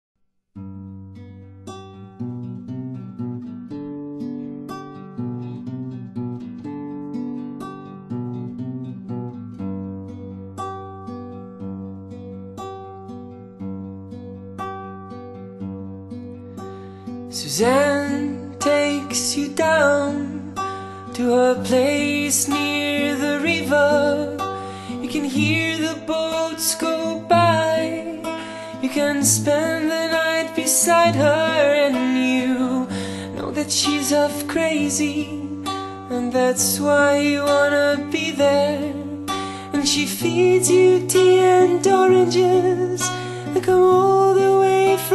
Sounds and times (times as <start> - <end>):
Acoustic guitar: 0.6 - 45.1.